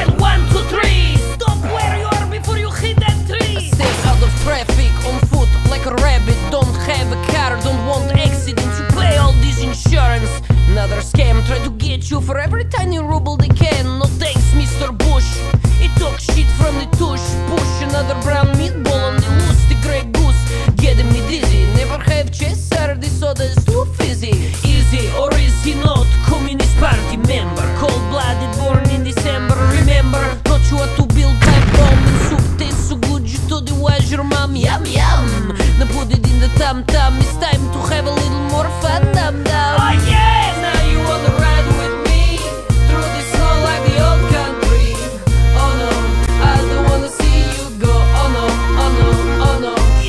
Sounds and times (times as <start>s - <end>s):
Pop music: 0.0s - 50.0s.